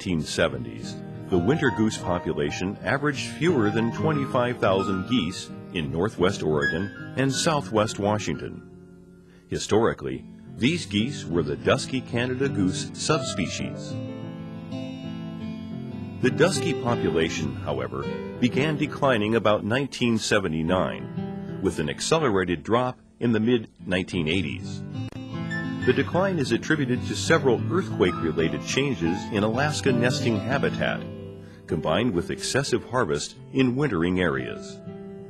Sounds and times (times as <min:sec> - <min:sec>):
Speech: 0:00.0 - 0:08.6, 0:09.5 - 0:14.0, 0:16.2 - 0:24.9, 0:25.8 - 0:31.1, 0:31.7 - 0:34.8
Music: 0:00.0 - 0:35.3.